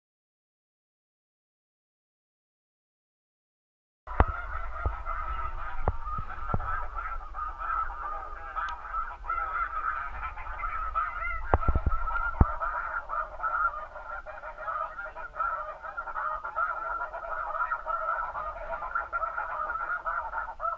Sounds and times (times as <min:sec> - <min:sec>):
Honk: 0:04.1 - 0:20.7.